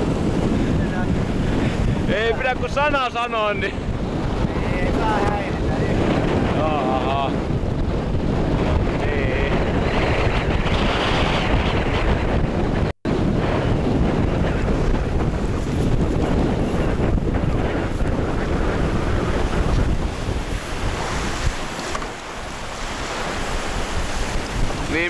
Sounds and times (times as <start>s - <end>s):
Sailboat, sailing ship: 0.0s - 25.0s
Wind noise (microphone): 0.0s - 25.0s.